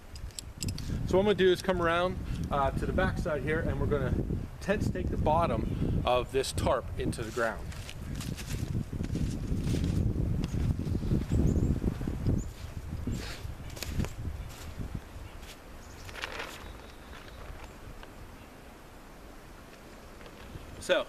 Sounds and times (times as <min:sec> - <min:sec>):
Outside, rural or natural: 0:00.0 - 0:21.0.